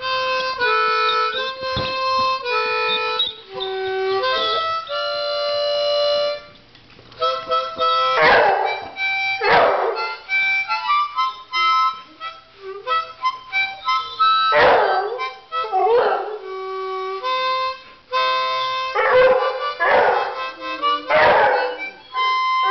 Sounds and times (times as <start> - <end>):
Wind instrument, woodwind instrument: 0.0 - 6.6, 7.2 - 8.2, 8.8 - 22.7
Harmonica: 0.0 - 22.7.